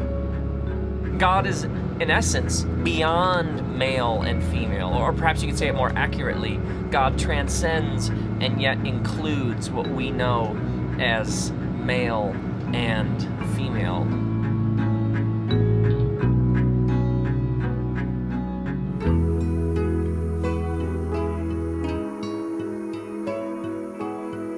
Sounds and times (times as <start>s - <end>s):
Music: 0.0s - 24.5s
Speech: 1.2s - 14.1s.